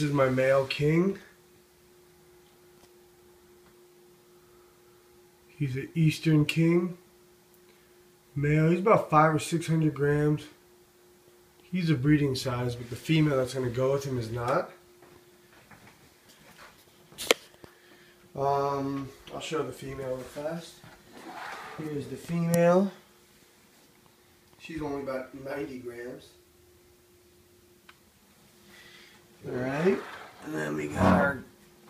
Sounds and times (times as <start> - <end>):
Speech: 0.0 - 1.4, 5.5 - 7.0, 8.4 - 10.6, 11.7 - 14.8, 18.4 - 20.8, 21.8 - 23.0, 24.6 - 26.4, 29.4 - 31.5
Inside, small room: 0.0 - 31.9.